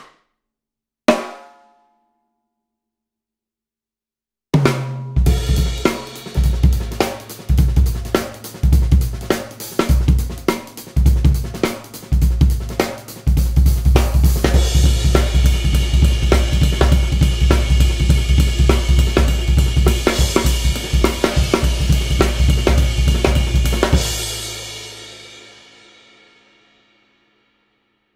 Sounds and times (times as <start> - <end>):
Bass drum: 4.6 - 25.1
Drum kit: 4.6 - 26.4
Rimshot: 4.8 - 12.0
Hi-hat: 5.5 - 13.3.